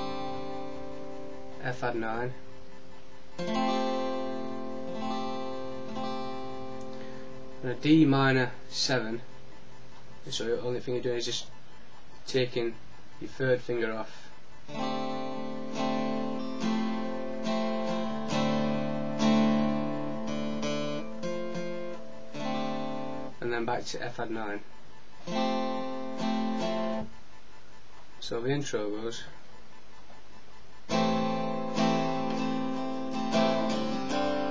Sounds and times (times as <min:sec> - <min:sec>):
Strum: 0:00.0 - 0:11.5, 0:14.6 - 0:24.5, 0:25.2 - 0:27.2, 0:30.9 - 0:34.5
Acoustic guitar: 0:00.0 - 0:34.5
Speech: 0:01.6 - 0:02.4, 0:07.6 - 0:09.2, 0:10.3 - 0:11.5, 0:12.3 - 0:14.2, 0:23.4 - 0:24.6, 0:28.2 - 0:29.4.